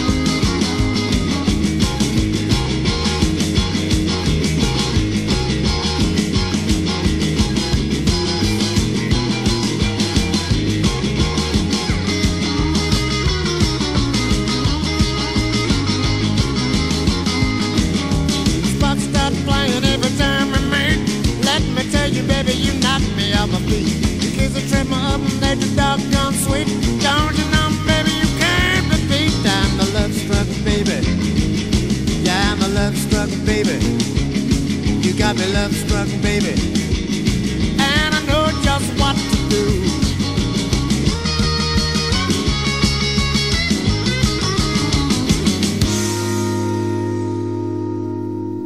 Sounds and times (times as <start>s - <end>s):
Guitar: 0.0s - 48.6s
Progressive rock: 0.0s - 48.6s
Singing: 18.6s - 31.1s, 37.8s - 40.2s.